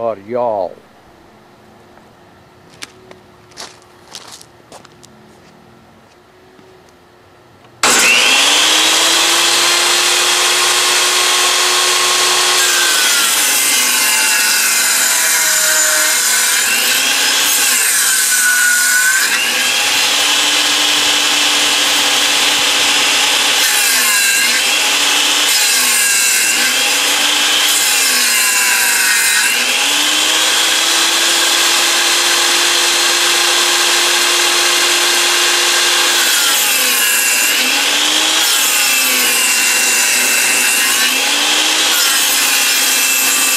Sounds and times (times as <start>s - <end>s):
Sawing: 7.8s - 43.5s.